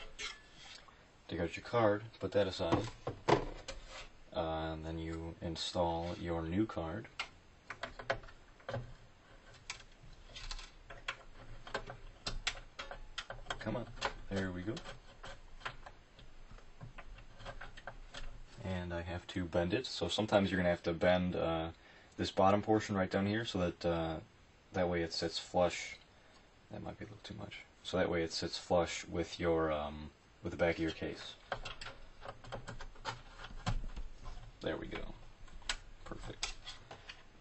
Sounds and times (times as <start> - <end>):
Speech: 1.3 - 3.0, 4.3 - 7.1, 13.6 - 14.8, 18.6 - 26.0, 26.7 - 31.4, 34.6 - 35.2, 36.1 - 36.4.